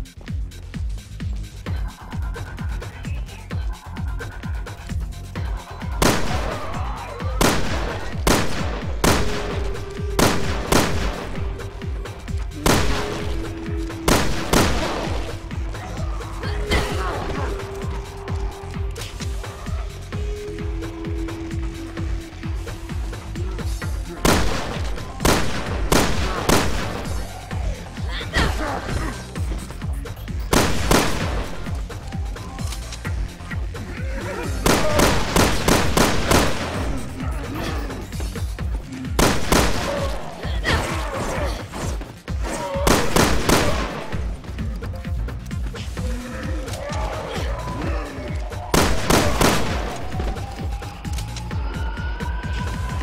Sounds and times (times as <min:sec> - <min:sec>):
Music: 0:00.0 - 0:53.0.